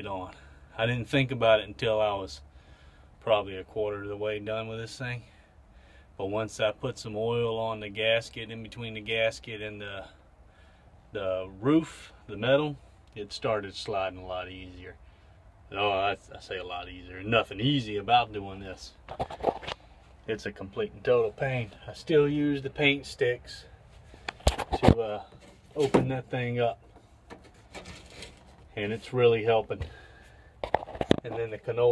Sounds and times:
Speech: 0.0s - 2.4s, 3.2s - 5.3s, 6.2s - 10.2s, 11.2s - 15.0s, 15.7s - 19.0s, 20.3s - 23.7s, 24.8s - 26.8s, 28.8s - 29.9s, 31.2s - 31.9s.

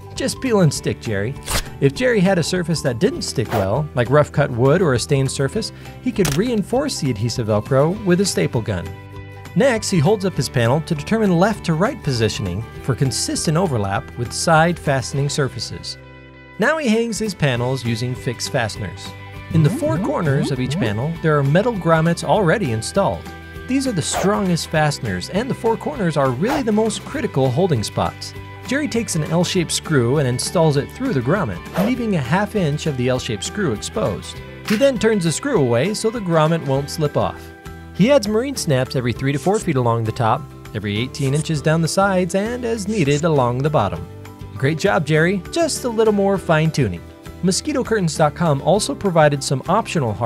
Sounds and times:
Speech: 0.0s - 9.0s, 9.6s - 16.0s, 16.6s - 50.2s
Music: 0.0s - 50.2s.

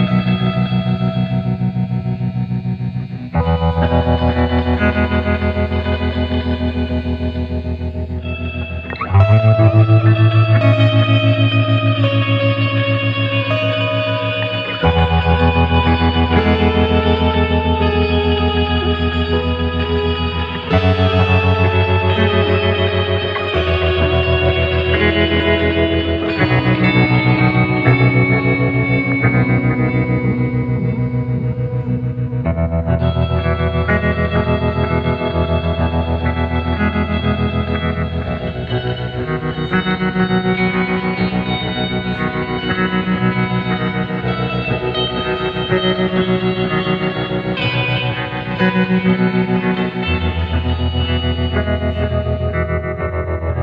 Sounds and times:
Music: 0.0s - 53.6s.

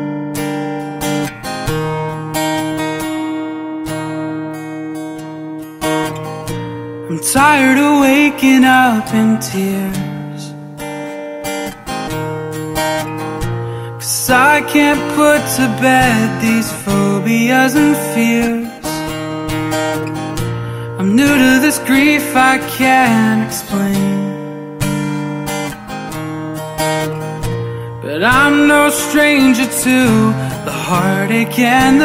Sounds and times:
Music: 0.0s - 32.0s.

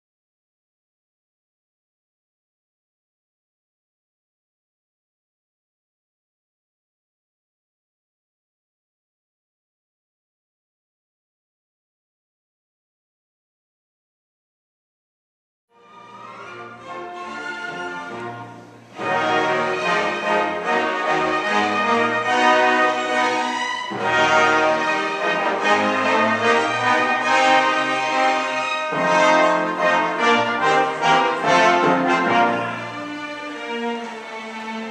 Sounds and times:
Music: 15.7s - 34.9s
Inside, large room or hall: 15.8s - 34.9s.

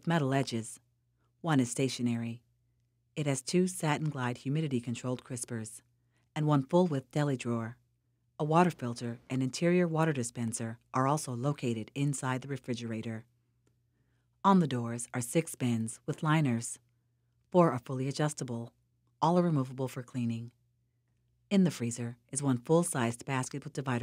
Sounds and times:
Speech: 0.0s - 0.8s, 1.4s - 2.4s, 3.2s - 5.8s, 6.4s - 7.8s, 8.4s - 13.3s, 14.5s - 16.8s, 17.6s - 20.5s, 21.5s - 24.0s.

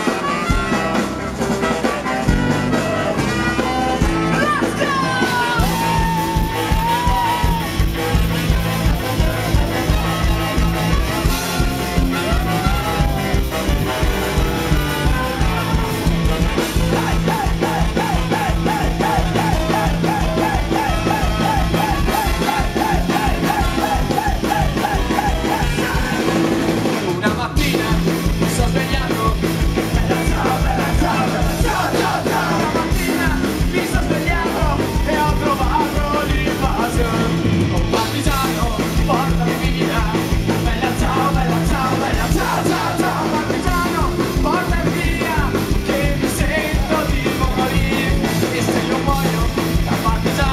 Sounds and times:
Music: 0.0s - 50.5s.

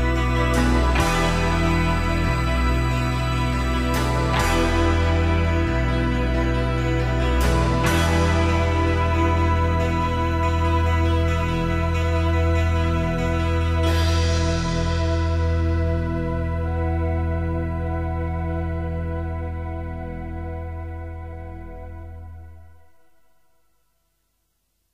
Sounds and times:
Tender music: 0.0s - 23.7s.

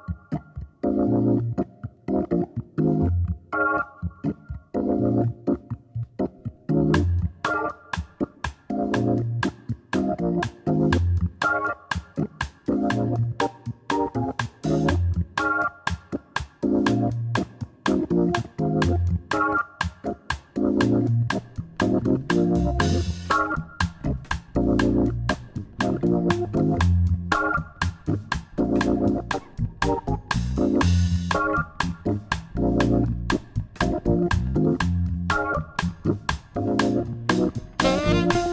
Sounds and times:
Music: 0.0s - 38.5s.

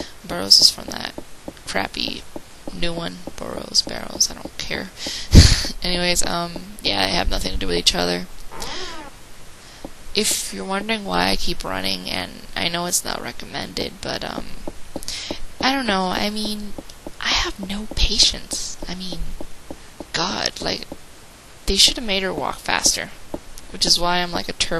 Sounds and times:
Speech: 0.0s - 8.9s, 10.2s - 19.4s, 20.1s - 20.9s, 21.7s - 24.8s.

